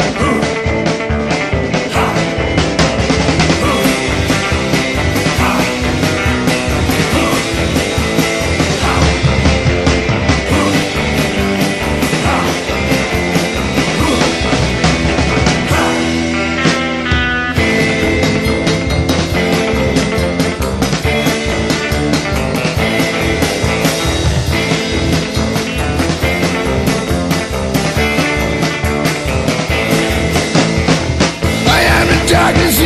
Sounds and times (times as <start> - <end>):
Psychedelic rock: 0.0 - 32.8.